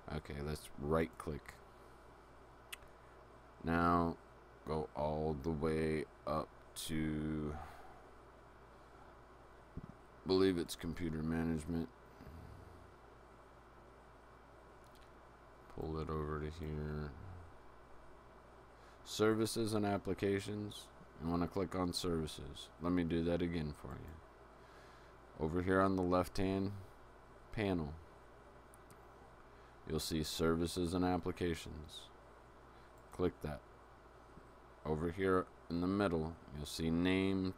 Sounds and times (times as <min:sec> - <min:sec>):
Speech: 0:00.0 - 0:01.6, 0:03.6 - 0:07.7, 0:10.3 - 0:11.9, 0:15.7 - 0:17.4, 0:19.0 - 0:24.2, 0:25.4 - 0:26.9, 0:27.5 - 0:28.0, 0:29.9 - 0:32.2, 0:33.1 - 0:33.6, 0:34.8 - 0:37.5.